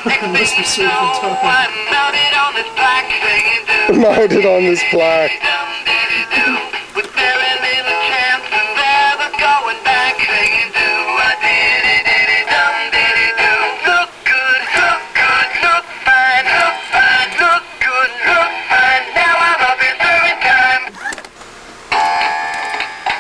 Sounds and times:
Music: 0.0 - 20.9, 21.9 - 23.2
Male singing: 0.0 - 21.0.

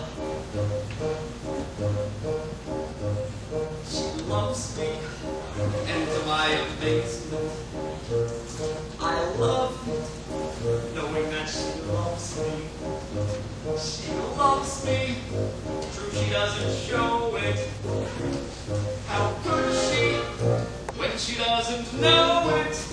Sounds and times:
Music: 0.0 - 22.9
Male singing: 3.9 - 5.2, 5.9 - 7.4, 19.1 - 20.4, 21.0 - 22.9.

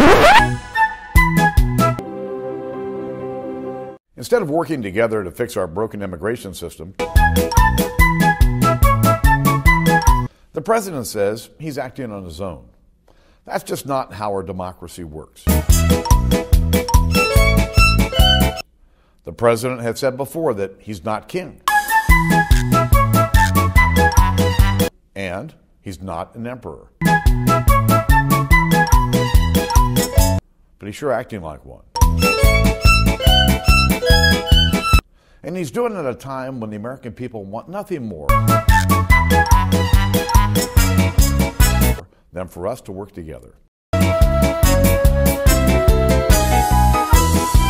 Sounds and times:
Music: 0.0 - 4.0, 7.0 - 10.3, 15.5 - 18.6, 21.7 - 24.9, 27.0 - 30.4, 32.0 - 35.0, 38.3 - 42.0, 44.0 - 47.6
Male speech, man speaking: 4.2 - 7.0, 10.6 - 12.7, 13.5 - 15.5, 19.3 - 21.6, 25.2 - 26.9, 30.8 - 31.8, 35.4 - 38.3, 42.4 - 43.6.

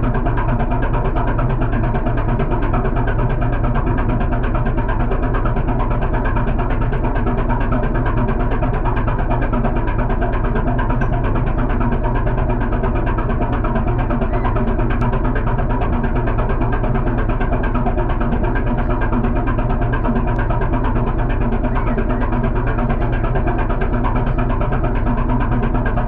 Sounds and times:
Heavy engine (low frequency): 0.0 - 26.0.

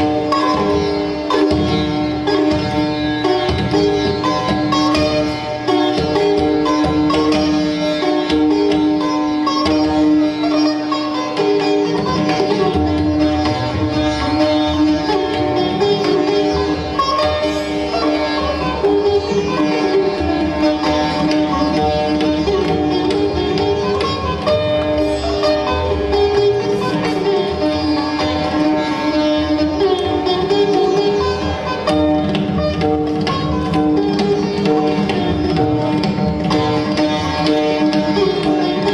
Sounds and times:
Sitar: 0.0 - 38.9.

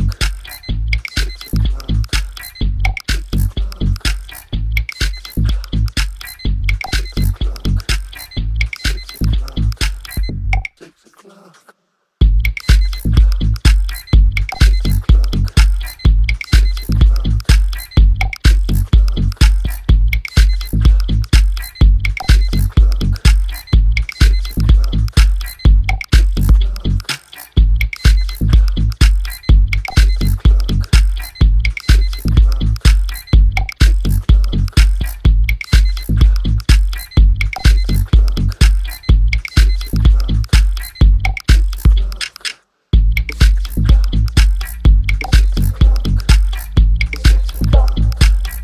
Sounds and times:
Music: 0.0 - 10.6, 12.2 - 42.1, 43.0 - 48.6
Tick-tock: 0.0 - 10.7, 12.4 - 27.2, 27.8 - 48.6.

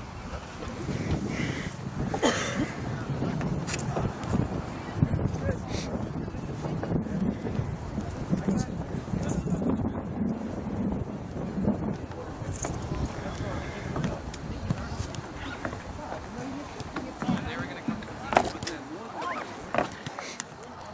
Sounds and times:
Speech: 11.9 - 20.9.

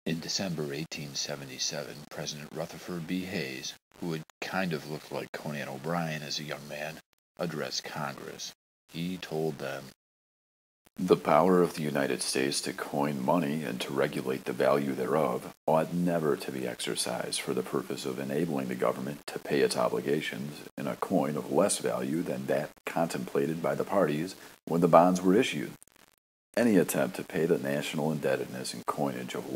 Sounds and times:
Speech: 0.1 - 10.0, 11.0 - 25.8, 26.6 - 29.5.

